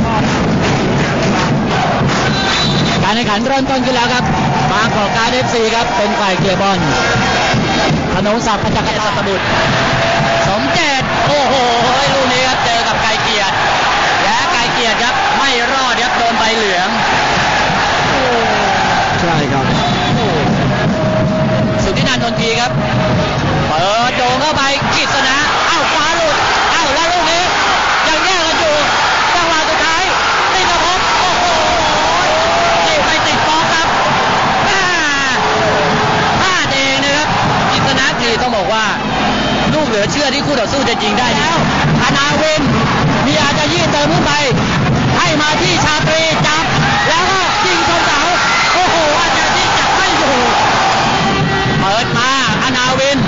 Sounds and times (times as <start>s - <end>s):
Speech: 3.0s - 7.0s, 8.2s - 9.4s, 10.5s - 13.5s, 14.2s - 17.0s, 19.2s - 20.4s, 21.8s - 22.7s, 23.7s - 31.5s, 32.8s - 33.9s, 36.4s - 39.0s, 39.7s - 44.6s, 45.2s - 50.6s, 51.8s - 53.2s.